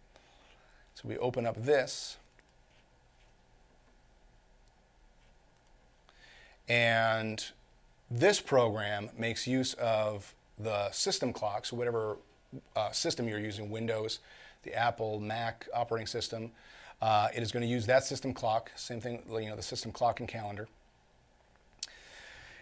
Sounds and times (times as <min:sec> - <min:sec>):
Speech: 0:01.0 - 0:02.3, 0:06.7 - 0:20.8.